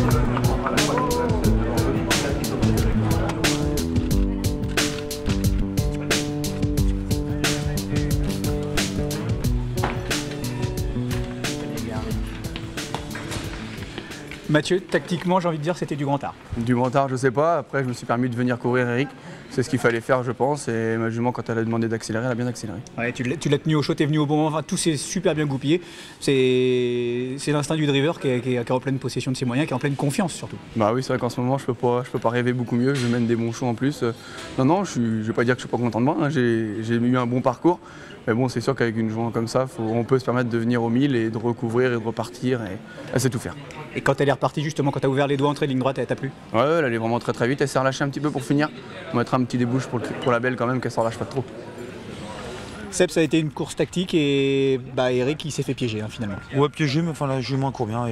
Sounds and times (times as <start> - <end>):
Speech: 14.5 - 51.5, 52.8 - 58.1.